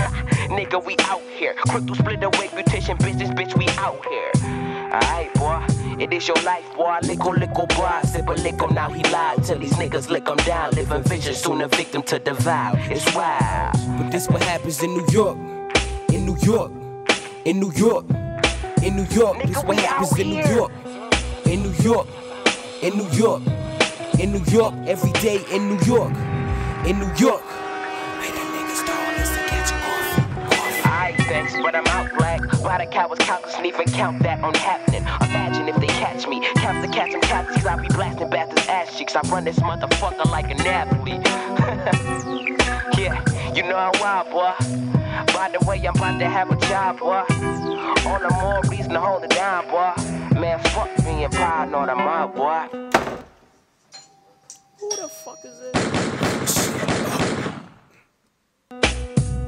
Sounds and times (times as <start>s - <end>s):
Hip hop music: 0.0s - 53.4s, 54.6s - 57.6s
Gunshot, gunfire: 53.0s - 53.3s, 55.8s - 57.9s.